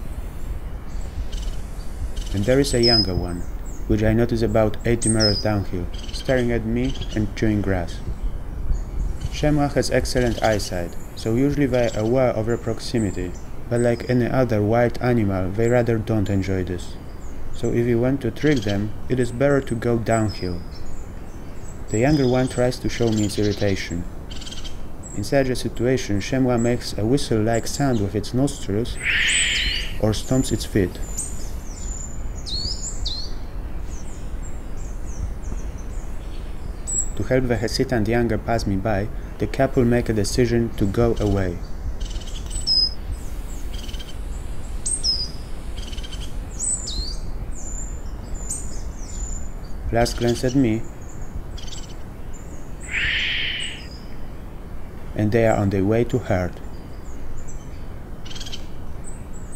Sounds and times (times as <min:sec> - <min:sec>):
Insect: 0:00.0 - 0:59.5
Speech: 0:02.3 - 0:08.1, 0:09.3 - 0:17.0, 0:17.6 - 0:20.6, 0:21.9 - 0:24.1, 0:25.2 - 0:29.0, 0:30.0 - 0:31.0, 0:37.2 - 0:41.6, 0:49.9 - 0:50.9, 0:55.2 - 0:56.6.